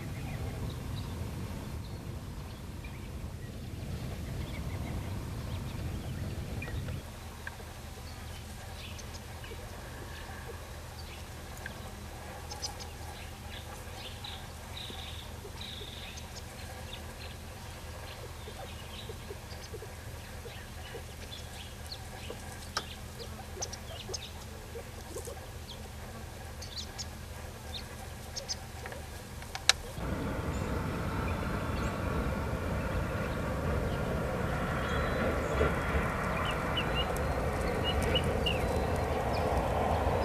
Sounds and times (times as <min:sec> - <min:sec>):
Bird: 0:00.0 - 0:30.8, 0:33.1 - 0:40.2.